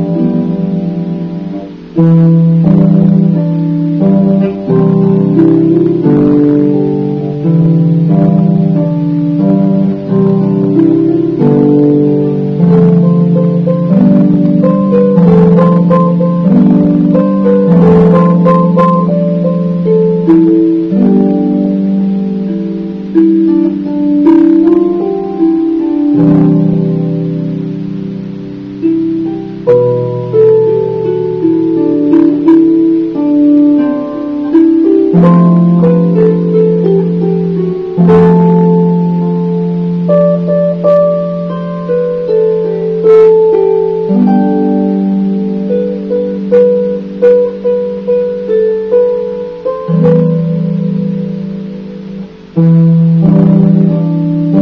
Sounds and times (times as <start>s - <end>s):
Music: 0.0s - 54.6s.